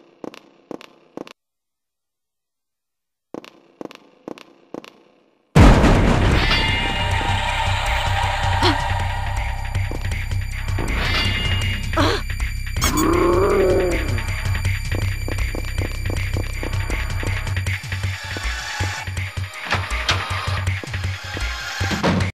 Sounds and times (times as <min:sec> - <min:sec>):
Music: 0:03.5 - 0:22.3.